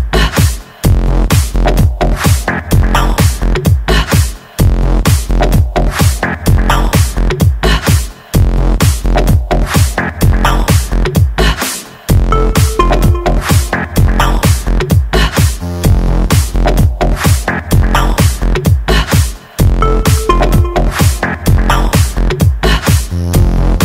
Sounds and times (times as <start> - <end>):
Techno: 12.2 - 15.6, 16.2 - 23.8.